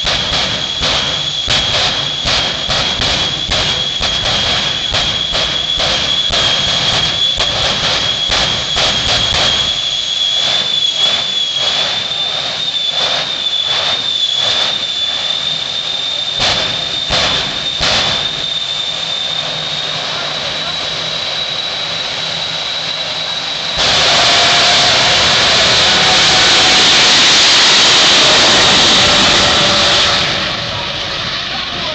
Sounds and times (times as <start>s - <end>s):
Truck: 0.0s - 31.9s.